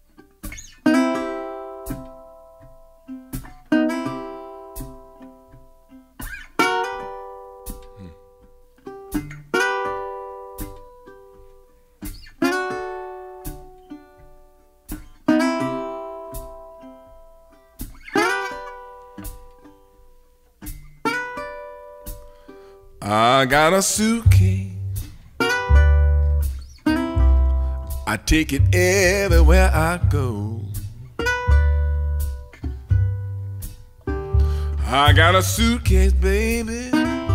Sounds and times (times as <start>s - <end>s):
Ukulele: 0.0s - 37.3s.